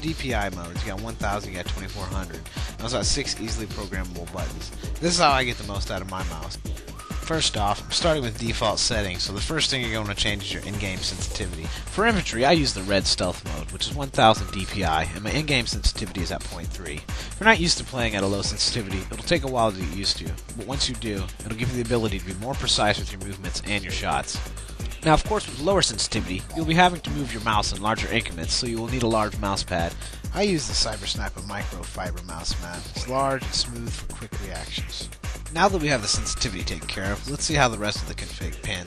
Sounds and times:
Music: 0:00.0 - 0:38.8
Speech: 0:00.0 - 0:38.8.

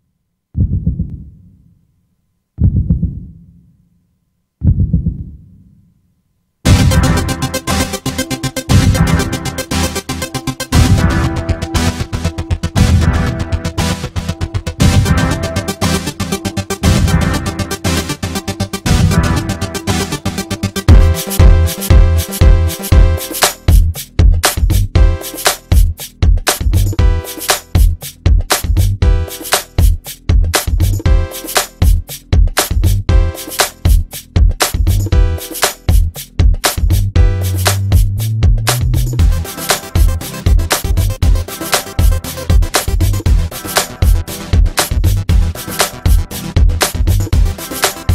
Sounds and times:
Music: 0:06.6 - 0:48.1.

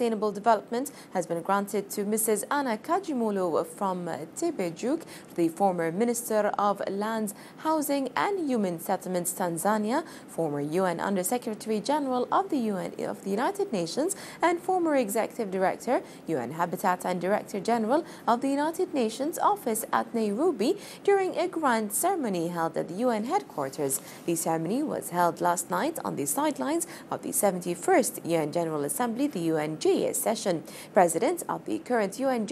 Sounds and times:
Speech: 0:00.0 - 0:32.5.

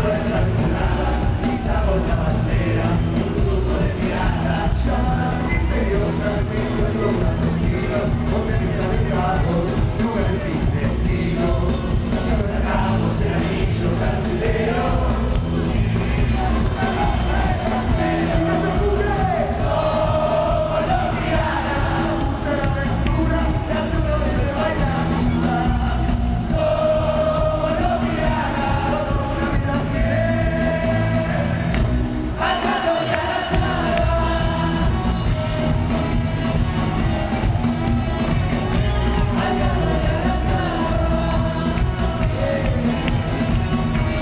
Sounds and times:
Disco: 0:00.0 - 0:44.2.

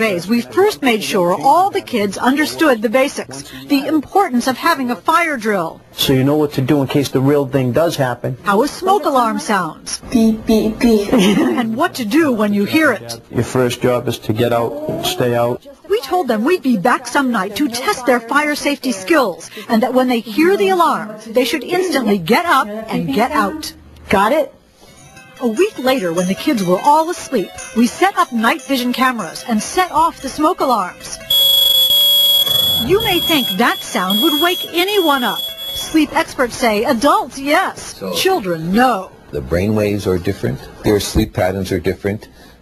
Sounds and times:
Music: 0:24.8 - 0:32.1
Smoke detector, smoke alarm: 0:31.3 - 0:36.0.

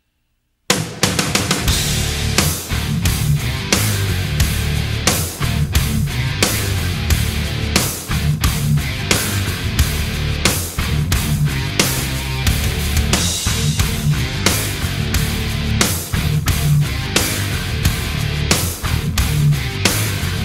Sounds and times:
Punk rock: 0:00.7 - 0:20.4.

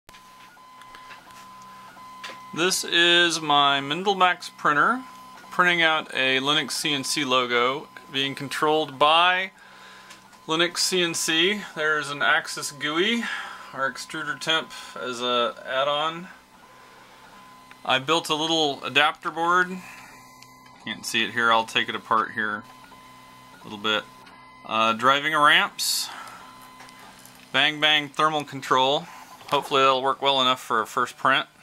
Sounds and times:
Speech: 0:02.5 - 0:09.6, 0:10.5 - 0:16.4, 0:17.8 - 0:19.9, 0:20.8 - 0:22.7, 0:23.6 - 0:24.1, 0:24.7 - 0:26.2, 0:27.5 - 0:31.6.

